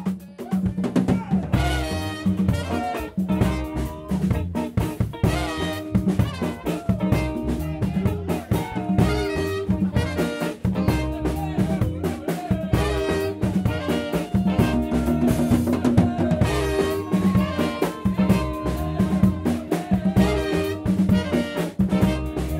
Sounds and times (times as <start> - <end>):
Bass drum: 0.0 - 22.5
Drum kit: 0.0 - 22.5
Trombone: 1.5 - 11.9, 12.6 - 22.5
Saxophone: 1.5 - 22.5
Trumpet: 1.5 - 22.5.